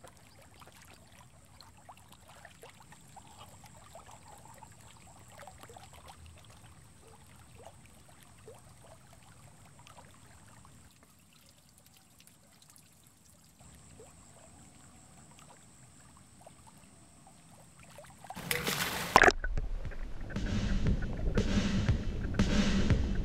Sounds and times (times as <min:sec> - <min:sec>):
Trickle, dribble: 0:00.0 - 0:18.4.